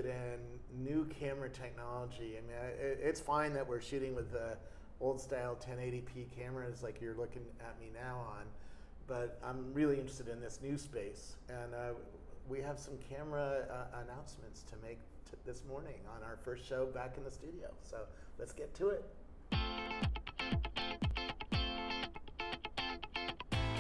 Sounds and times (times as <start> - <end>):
Speech: 0.0 - 19.2.